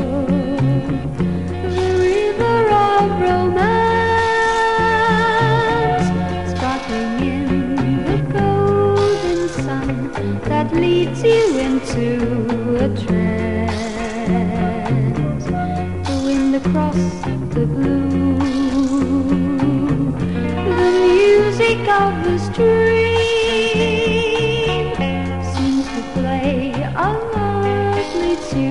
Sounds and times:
Music: 0:00.0 - 0:28.7.

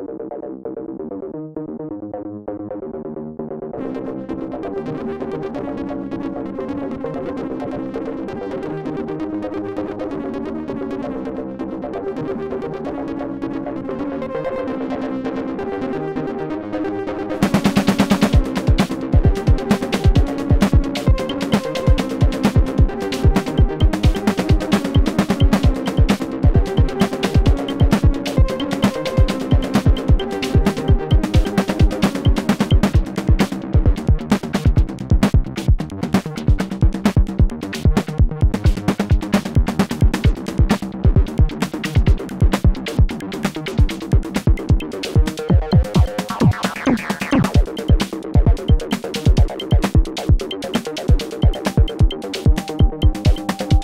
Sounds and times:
Techno: 0:12.2 - 0:53.8.

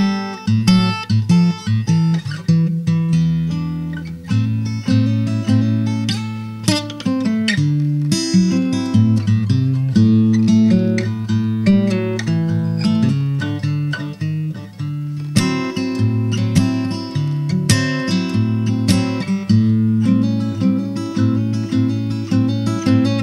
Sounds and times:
Acoustic guitar: 0:00.0 - 0:23.2.

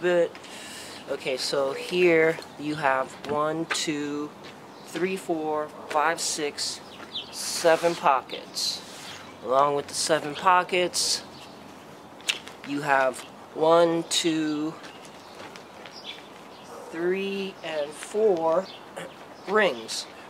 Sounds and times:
Speech: 0:00.0 - 0:00.4, 0:01.1 - 0:06.8, 0:07.4 - 0:08.8, 0:09.4 - 0:11.3, 0:12.7 - 0:14.8, 0:16.9 - 0:20.2.

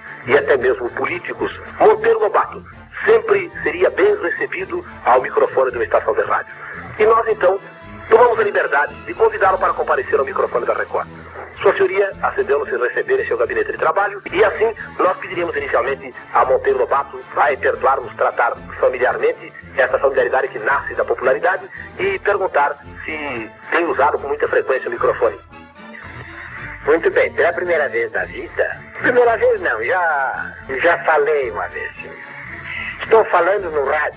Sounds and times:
Music: 0:00.0 - 0:34.1
Radio: 0:00.1 - 0:25.4, 0:26.0 - 0:34.1
Speech: 0:00.2 - 0:25.4, 0:26.8 - 0:32.1, 0:32.8 - 0:34.1.

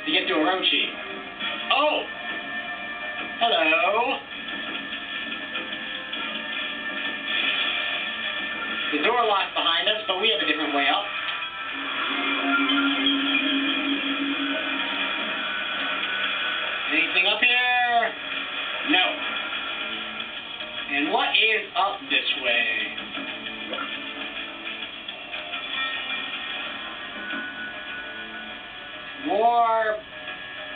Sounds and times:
Music: 0:00.0 - 0:30.7
Speech: 0:00.1 - 0:01.0, 0:03.4 - 0:04.2, 0:08.9 - 0:11.1, 0:16.9 - 0:18.2, 0:20.9 - 0:23.0, 0:29.2 - 0:30.0.

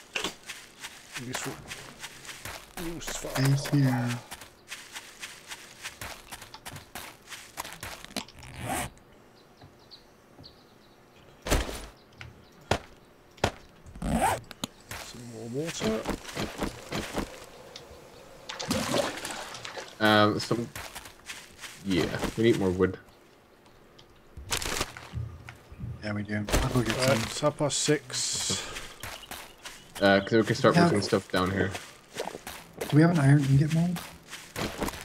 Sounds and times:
Speech: 0:01.2 - 0:01.7, 0:02.8 - 0:04.3, 0:15.0 - 0:16.1, 0:20.0 - 0:20.7, 0:21.8 - 0:23.0, 0:26.0 - 0:28.7, 0:30.0 - 0:31.8, 0:32.8 - 0:34.0.

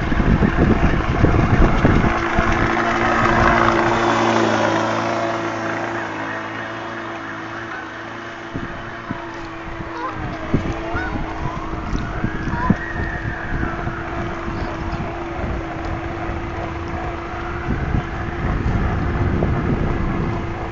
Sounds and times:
Motorboat, speedboat: 0:00.0 - 0:20.7
Sailboat, sailing ship: 0:00.0 - 0:20.7.

